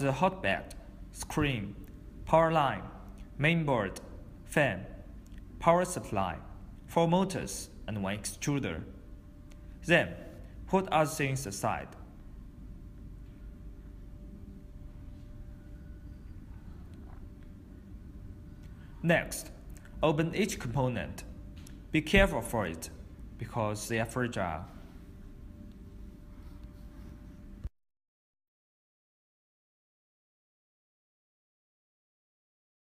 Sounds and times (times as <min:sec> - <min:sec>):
Speech: 0:00.0 - 0:05.0, 0:05.6 - 0:09.0, 0:09.8 - 0:12.0, 0:19.0 - 0:21.3, 0:21.9 - 0:24.8.